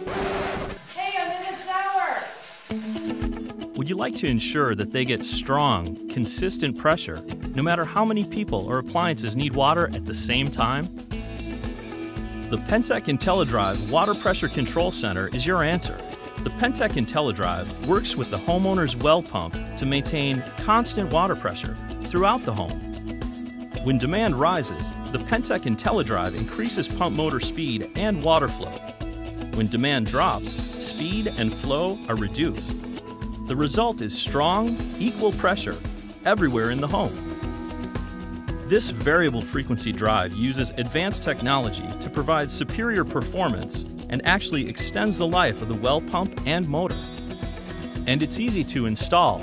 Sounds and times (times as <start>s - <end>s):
Music: 0.0s - 49.4s
Speech: 1.0s - 2.4s, 3.8s - 10.9s, 12.6s - 22.8s, 23.8s - 28.8s, 29.6s - 32.7s, 33.5s - 37.2s, 38.7s - 46.9s, 48.1s - 49.4s.